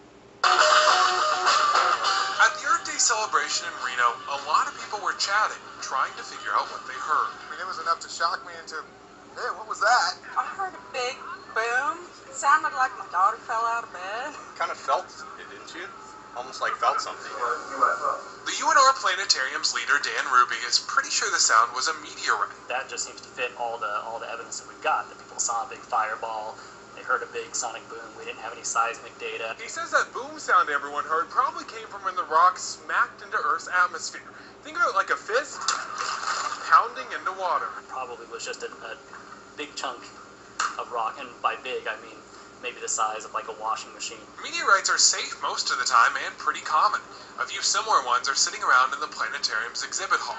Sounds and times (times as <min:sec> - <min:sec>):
Speech: 0:02.4 - 0:35.6, 0:36.7 - 0:39.0, 0:40.8 - 0:50.3.